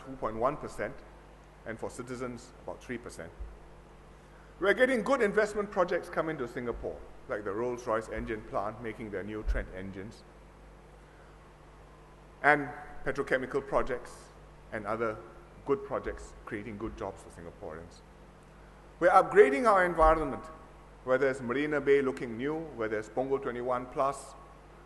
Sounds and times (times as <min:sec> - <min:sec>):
Male speech, man speaking: 0:00.0 - 0:01.0, 0:01.7 - 0:03.4, 0:04.6 - 0:10.2, 0:12.4 - 0:18.0, 0:19.0 - 0:24.4
Narration, monologue: 0:00.0 - 0:24.8.